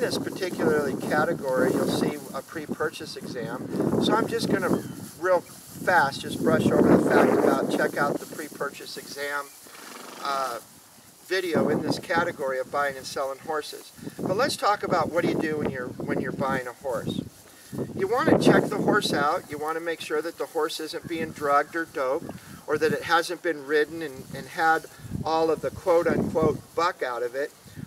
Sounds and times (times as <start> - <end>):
Speech: 0.0 - 9.5, 10.2 - 10.6, 11.3 - 17.3, 18.0 - 27.5.